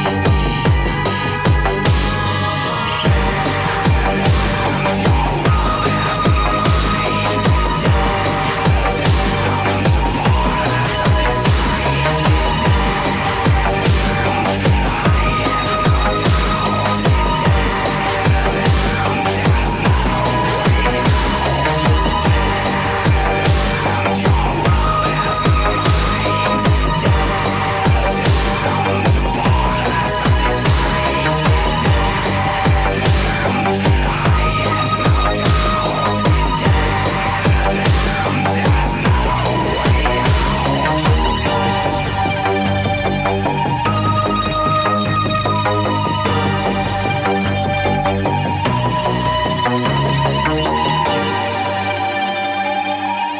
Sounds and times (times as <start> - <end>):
Video game music: 0.0 - 53.3.